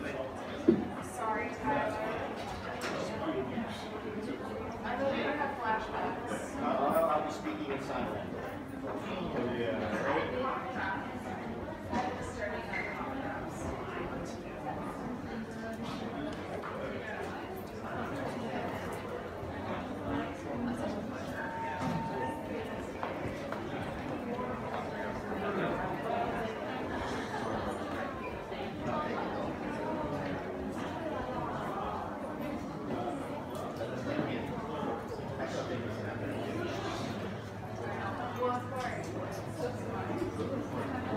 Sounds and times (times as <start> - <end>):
Speech: 0.0 - 41.1.